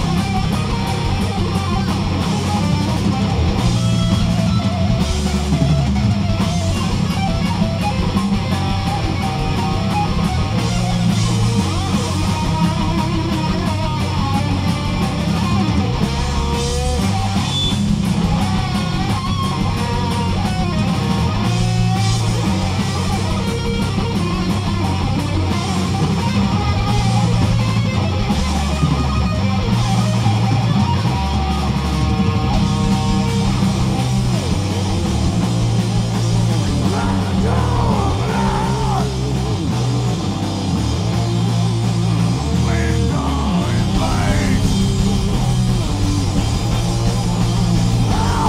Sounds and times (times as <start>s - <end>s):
Music: 0.0s - 48.4s
Singing: 36.8s - 39.2s, 42.6s - 44.9s, 48.1s - 48.4s.